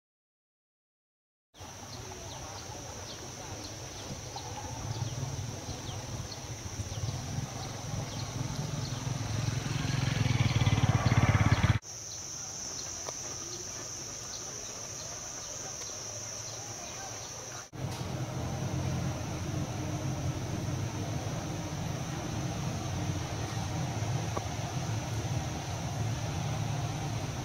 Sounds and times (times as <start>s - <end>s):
Chirp, tweet: 1.9s - 9.2s.